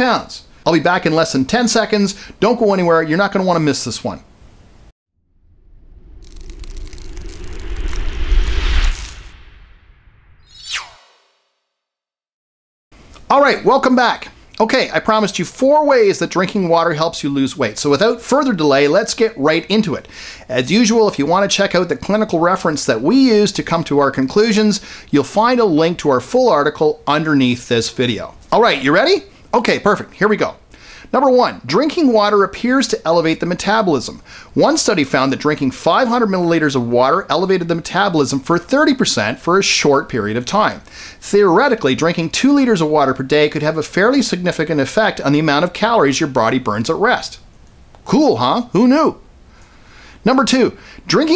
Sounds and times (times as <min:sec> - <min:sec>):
Speech: 0:00.0 - 0:04.2, 0:13.3 - 0:47.4, 0:48.0 - 0:49.2, 0:50.2 - 0:51.3.